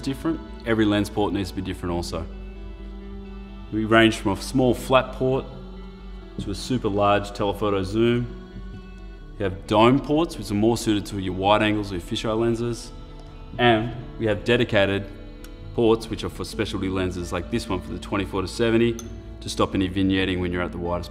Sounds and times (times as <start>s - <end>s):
Speech: 0.0s - 2.3s, 3.7s - 5.6s, 6.4s - 8.3s, 9.4s - 12.9s, 13.6s - 15.1s, 15.8s - 21.1s
Music: 0.0s - 21.1s.